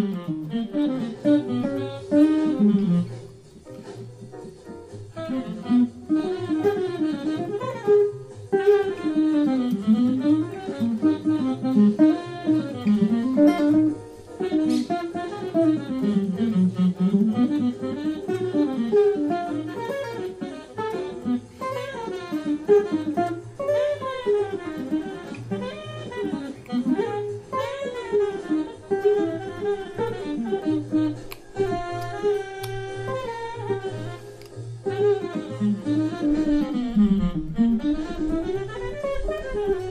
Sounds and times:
Acoustic guitar: 0.0 - 39.9
Strum: 0.0 - 39.9.

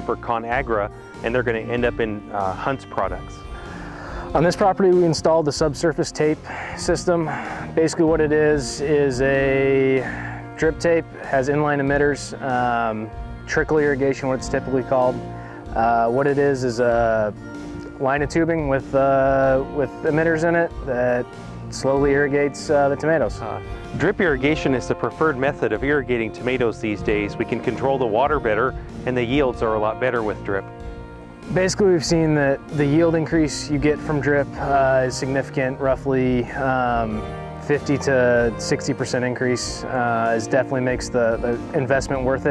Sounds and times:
Speech: 0.0 - 3.4, 4.4 - 17.4, 18.0 - 30.6, 31.5 - 42.5
Music: 0.0 - 42.5.

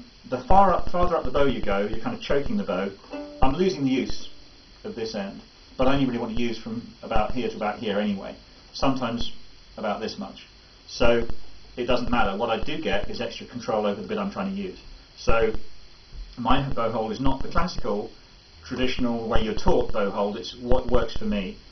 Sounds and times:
Speech: 0.0 - 15.6, 16.4 - 21.7.

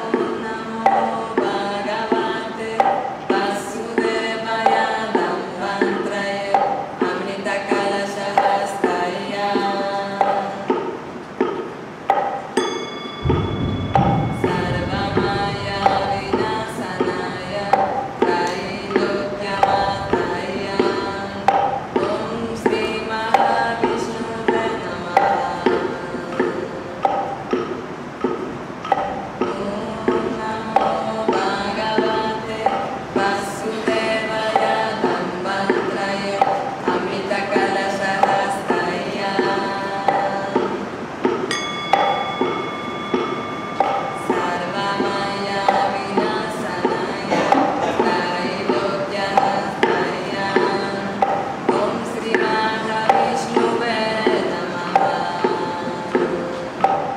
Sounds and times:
Mantra: 0.0 - 57.1.

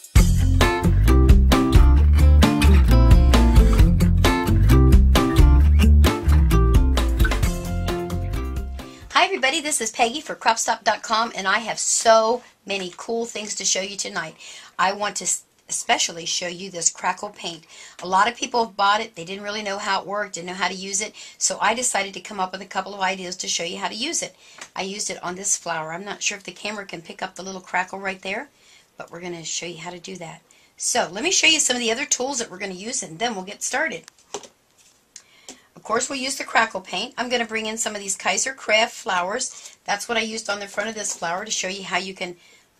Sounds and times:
Speech: 9.1 - 34.1, 35.8 - 42.4.

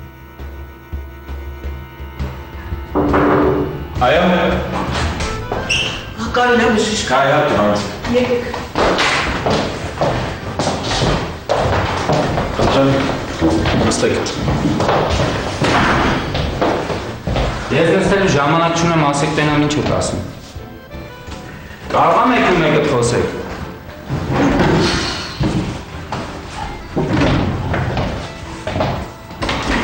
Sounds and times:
Music: 0.0 - 29.8
Speech: 12.7 - 14.5, 17.7 - 20.3, 21.9 - 23.5.

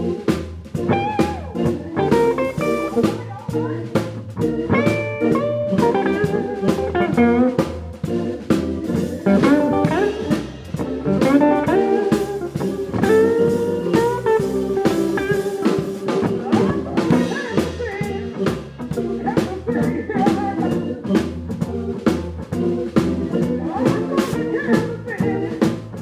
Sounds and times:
Music: 0.0 - 26.0.

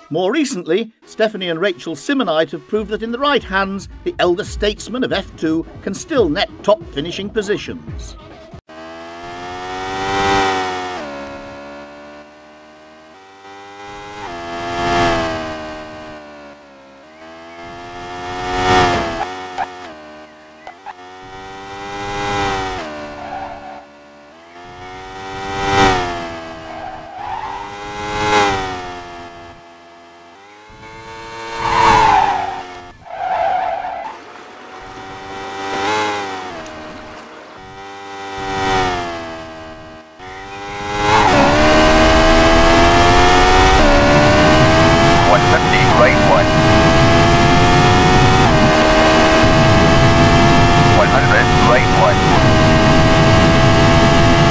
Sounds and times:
Speech: 0.0 - 8.4, 45.2 - 46.5, 50.9 - 52.6
Music: 1.7 - 8.6.

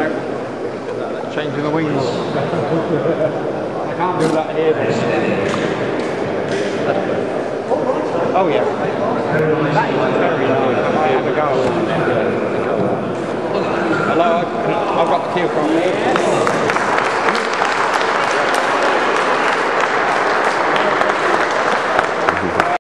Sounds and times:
Speech: 0.9 - 2.6, 3.8 - 5.9, 6.5 - 16.7.

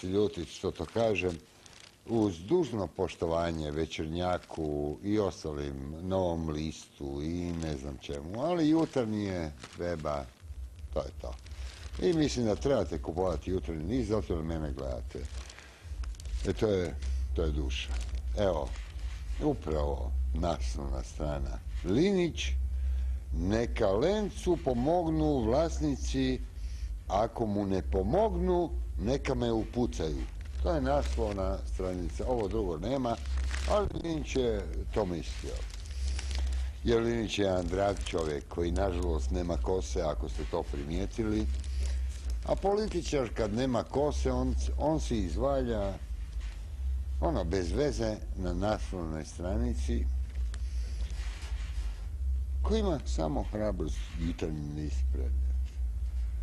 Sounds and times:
Speech: 0.0 - 1.4, 2.0 - 10.3, 10.9 - 15.4, 16.4 - 18.8, 19.4 - 22.6, 23.3 - 26.5, 27.1 - 35.9, 36.8 - 41.6, 42.4 - 46.0, 47.2 - 50.2, 52.6 - 55.4.

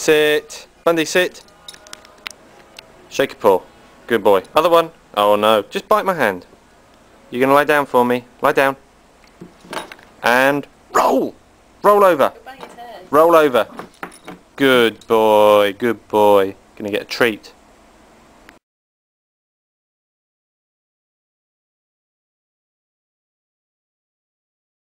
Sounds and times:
Speech: 7.3 - 8.8, 14.6 - 17.6.

